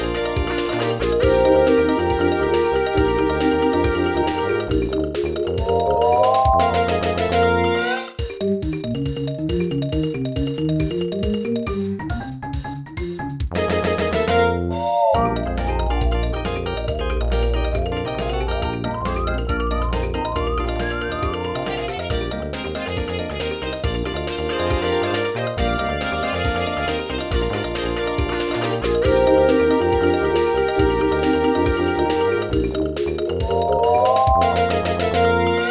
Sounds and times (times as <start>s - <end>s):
Funny music: 0.0s - 35.7s
Video game music: 0.0s - 35.7s.